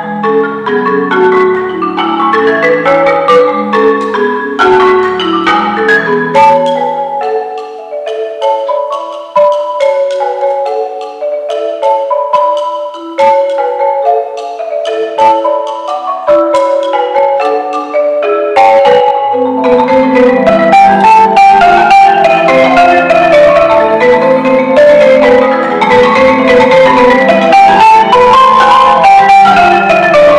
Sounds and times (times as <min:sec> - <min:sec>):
Inside, large room or hall: 0:00.0 - 0:30.3
Marimba, xylophone: 0:00.0 - 0:30.3.